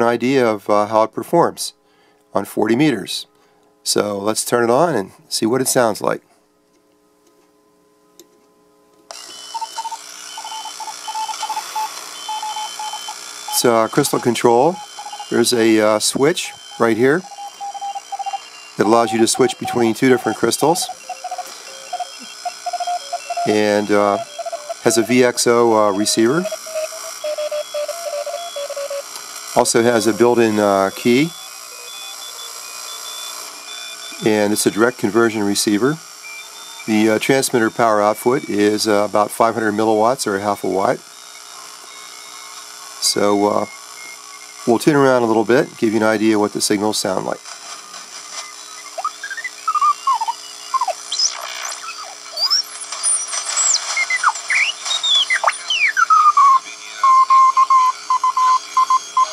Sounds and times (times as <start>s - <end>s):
Speech: 0.0s - 1.8s, 2.4s - 6.2s, 13.6s - 17.2s, 18.8s - 20.9s, 23.5s - 24.2s, 24.8s - 26.5s, 29.6s - 31.4s, 34.2s - 36.0s, 36.9s - 41.0s, 43.0s - 43.7s, 44.7s - 47.4s.